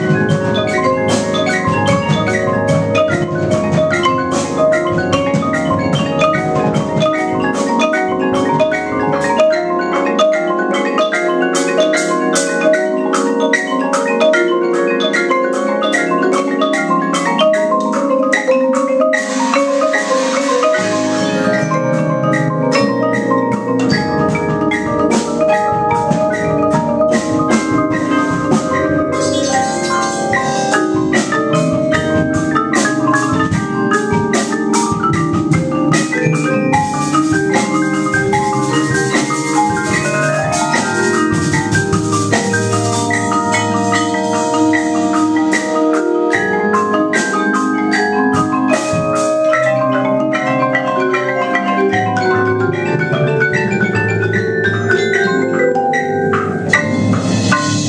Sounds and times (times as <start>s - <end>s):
Marimba, xylophone: 0.0s - 57.8s
Vibraphone: 0.0s - 57.8s.